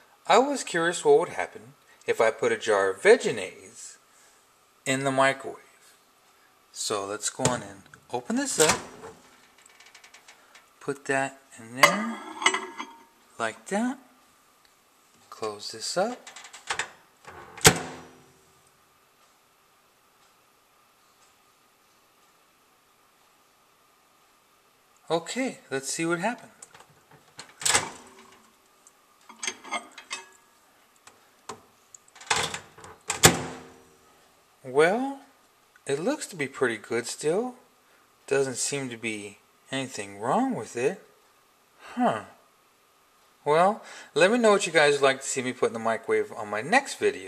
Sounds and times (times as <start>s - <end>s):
Inside, small room: 0.0s - 47.2s
Speech: 0.2s - 4.0s, 4.8s - 5.8s, 6.7s - 8.9s, 10.8s - 12.8s, 13.4s - 14.1s, 15.2s - 16.3s, 25.0s - 26.6s, 34.6s - 37.7s, 38.3s - 41.2s, 41.8s - 42.4s, 43.4s - 47.2s.